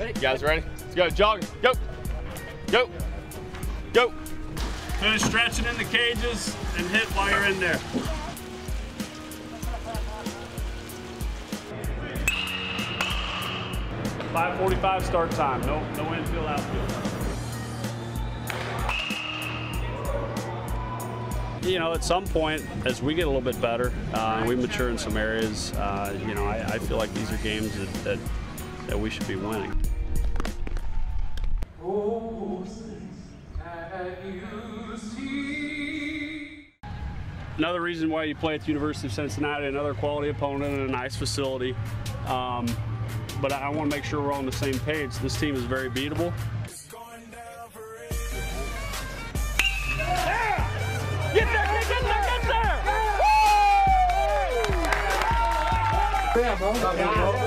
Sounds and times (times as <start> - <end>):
Music: 0.0 - 57.4.